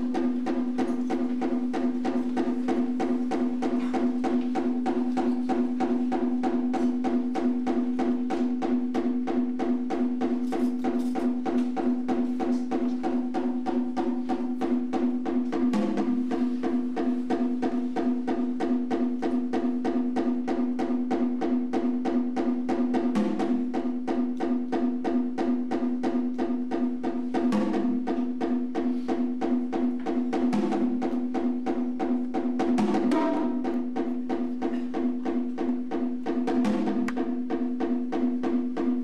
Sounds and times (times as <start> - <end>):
Percussion: 0.0 - 39.0.